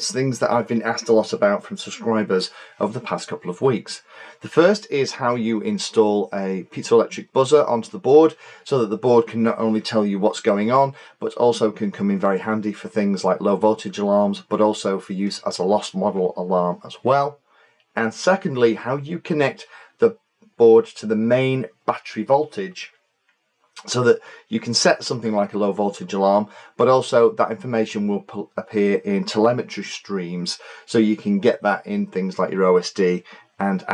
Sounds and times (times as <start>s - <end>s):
Speech: 0.0s - 17.4s, 18.0s - 22.9s, 23.8s - 33.9s.